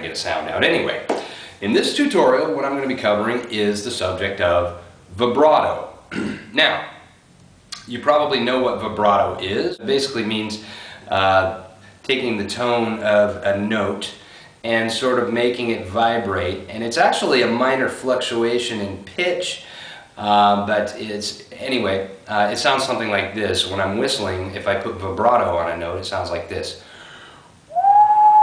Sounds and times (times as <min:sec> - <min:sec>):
Speech: 0:00.0 - 0:07.0, 0:07.8 - 0:19.6, 0:20.2 - 0:26.8.